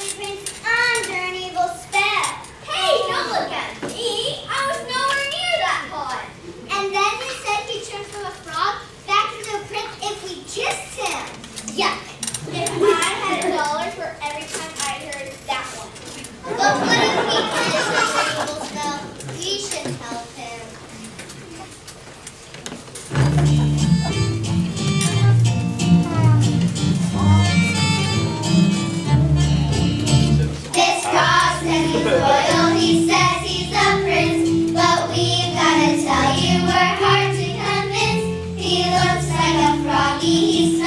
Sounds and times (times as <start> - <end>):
Speech: 0.0 - 16.0, 16.6 - 20.8, 30.4 - 32.5
Music: 23.1 - 40.8.